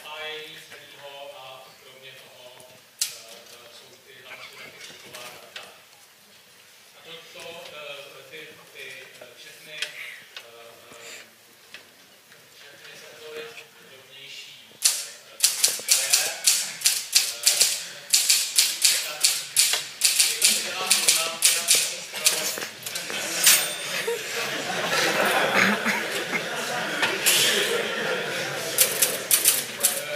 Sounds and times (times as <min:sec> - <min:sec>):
Speech: 0:00.0 - 0:05.8, 0:07.0 - 0:11.3, 0:12.6 - 0:16.4, 0:20.2 - 0:23.4.